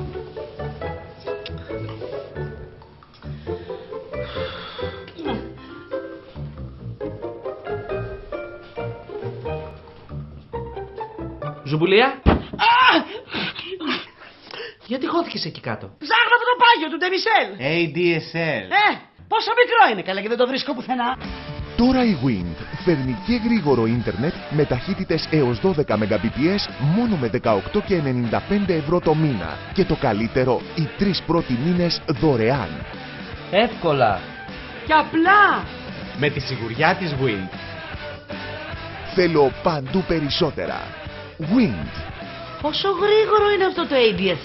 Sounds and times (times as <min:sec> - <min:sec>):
Music: 0:00.0 - 0:12.5, 0:16.6 - 0:44.4.